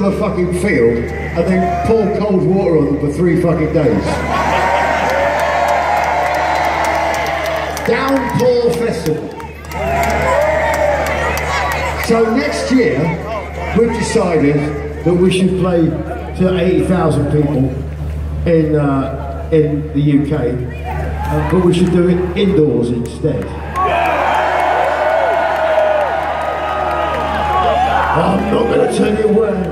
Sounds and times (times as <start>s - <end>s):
Male speech, man speaking: 0.0s - 4.2s, 7.8s - 9.3s, 12.0s - 17.8s, 18.4s - 20.7s, 21.3s - 23.6s, 28.2s - 29.7s.